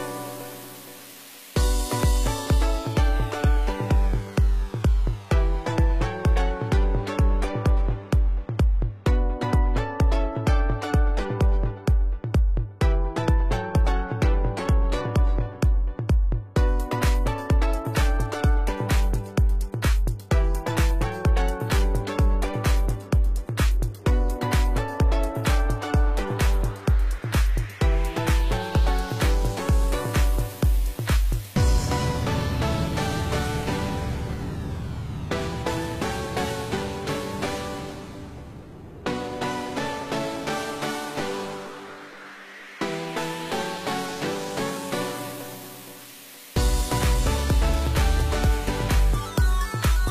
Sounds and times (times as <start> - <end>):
Music: 0.0 - 50.1.